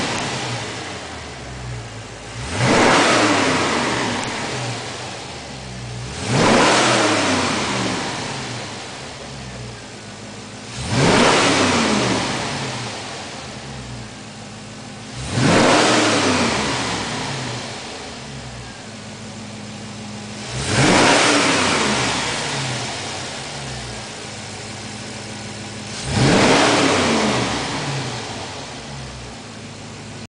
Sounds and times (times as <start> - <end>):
Accelerating, revving, vroom: 0.0 - 1.0, 2.3 - 5.0, 6.0 - 8.8, 10.7 - 13.2, 15.1 - 17.9, 20.4 - 23.3, 25.9 - 28.7
Idling: 0.0 - 30.2
Vehicle: 0.0 - 30.2.